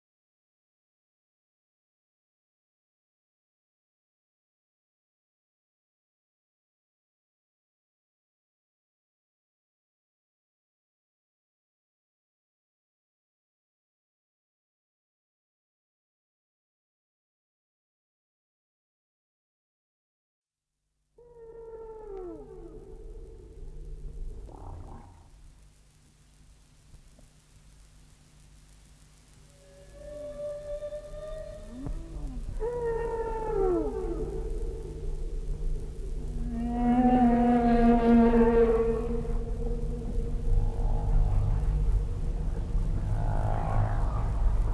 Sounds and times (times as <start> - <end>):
Animal: 21.2 - 25.4, 29.5 - 44.7.